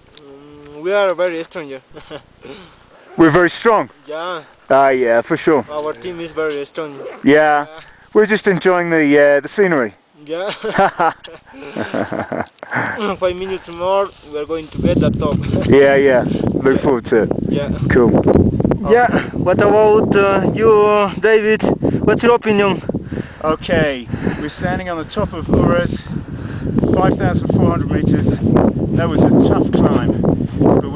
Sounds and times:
Outside, rural or natural: 0.0s - 30.9s.

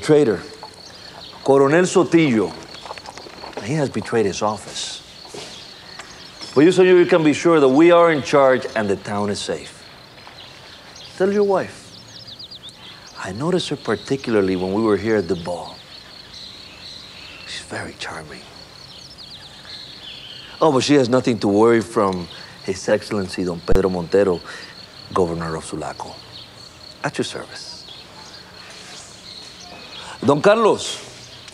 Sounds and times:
Cricket: 0.0s - 31.5s.

